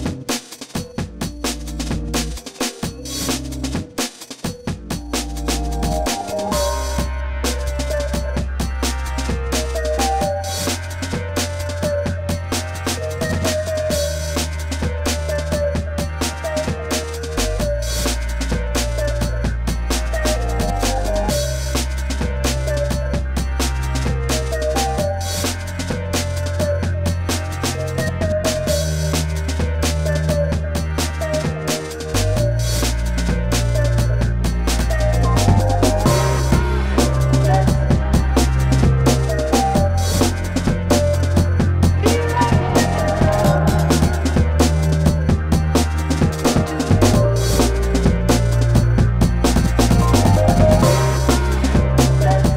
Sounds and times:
Music: 0:00.0 - 0:52.5.

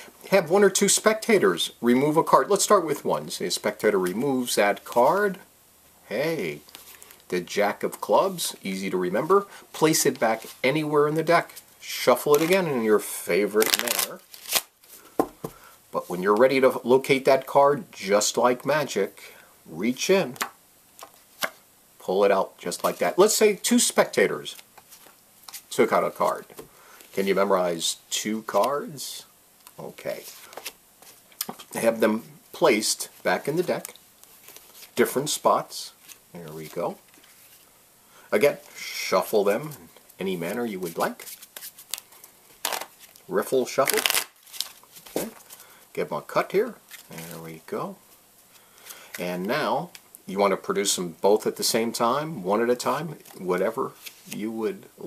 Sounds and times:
Speech: 0:00.3 - 0:05.5, 0:06.1 - 0:06.7, 0:07.3 - 0:14.2, 0:15.9 - 0:20.4, 0:22.0 - 0:24.6, 0:25.7 - 0:26.6, 0:27.2 - 0:30.4, 0:31.7 - 0:34.0, 0:35.0 - 0:37.0, 0:38.3 - 0:41.3, 0:43.3 - 0:44.2, 0:45.2 - 0:48.0, 0:49.2 - 0:55.0.

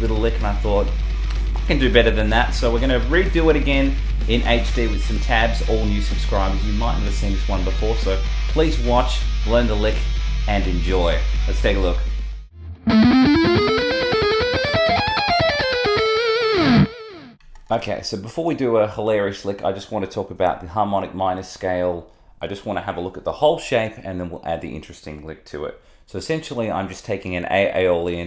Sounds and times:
Speech: 0:00.0 - 0:01.0, 0:01.6 - 0:12.1, 0:17.7 - 0:28.2.

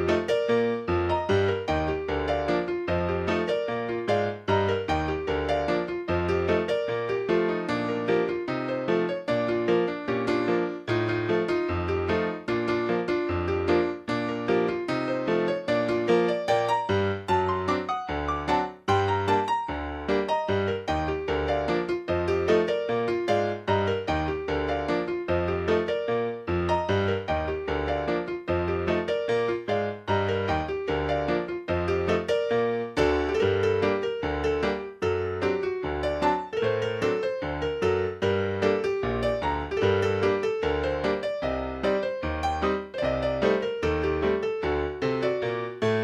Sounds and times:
Video game music: 0:00.0 - 0:46.0.

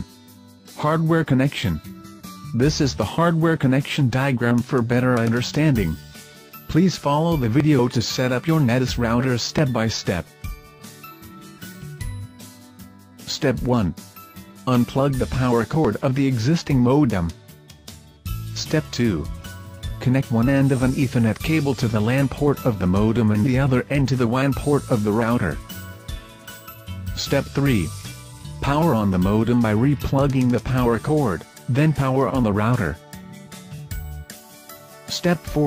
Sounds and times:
Music: 0:00.0 - 0:35.6
Speech: 0:00.8 - 0:01.9, 0:02.6 - 0:06.0, 0:06.7 - 0:10.3, 0:13.3 - 0:14.0, 0:14.7 - 0:17.4, 0:18.6 - 0:19.4, 0:20.0 - 0:25.6, 0:27.2 - 0:33.0, 0:35.1 - 0:35.6.

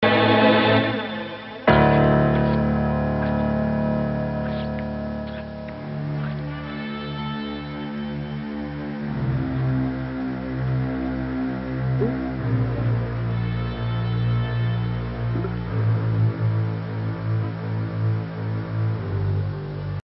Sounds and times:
Music: 0:00.0 - 0:20.0.

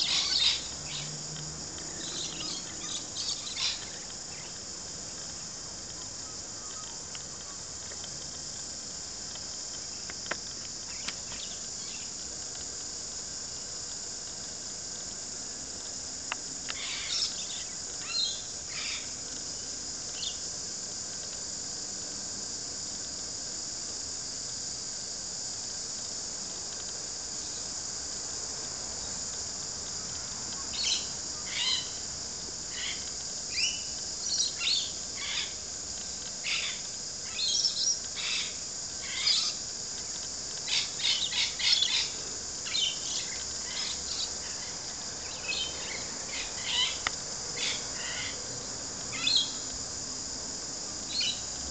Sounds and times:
Outside, rural or natural: 0:00.0 - 0:51.7.

